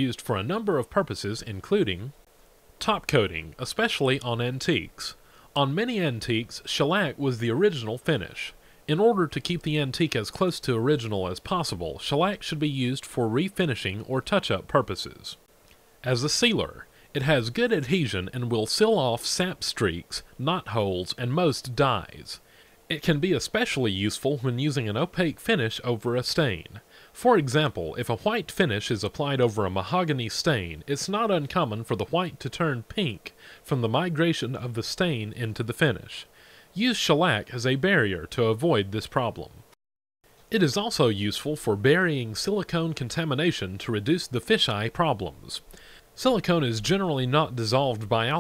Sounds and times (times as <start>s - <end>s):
Speech: 0.0s - 2.2s, 2.8s - 15.4s, 16.0s - 39.7s, 40.5s - 48.4s.